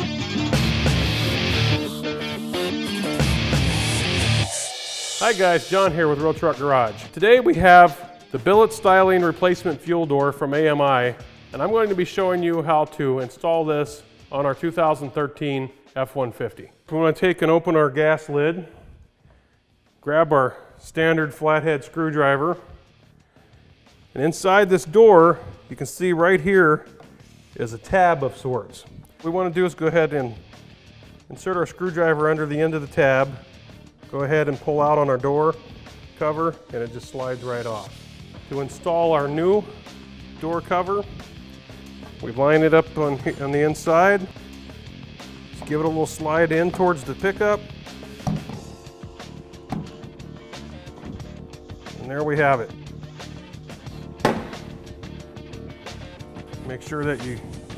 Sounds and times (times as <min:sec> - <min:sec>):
Music: 0:00.0 - 0:57.7
Speech: 0:05.2 - 0:18.8, 0:20.0 - 0:22.7, 0:24.2 - 0:26.9, 0:27.6 - 0:30.4, 0:31.3 - 0:33.4, 0:34.1 - 0:35.6, 0:36.2 - 0:37.9, 0:38.5 - 0:39.8, 0:40.4 - 0:41.1, 0:42.2 - 0:44.3, 0:45.6 - 0:47.6, 0:52.0 - 0:52.7, 0:56.6 - 0:57.6.